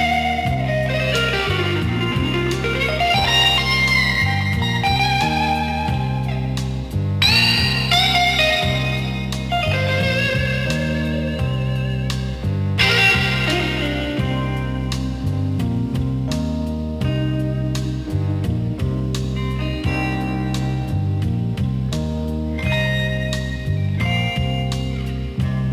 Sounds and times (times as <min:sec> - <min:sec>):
Blues: 0:00.0 - 0:25.7.